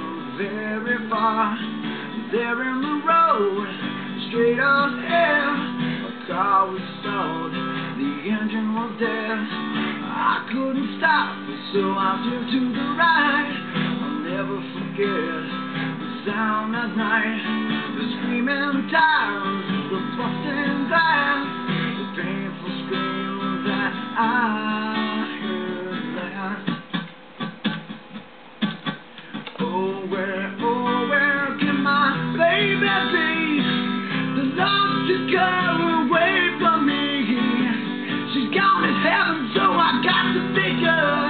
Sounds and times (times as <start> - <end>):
Acoustic guitar: 0.0 - 41.3.